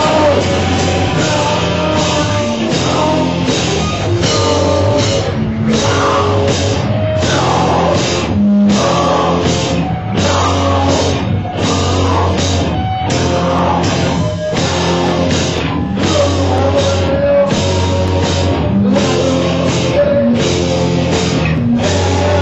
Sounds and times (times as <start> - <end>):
Heavy metal: 0.0 - 22.4.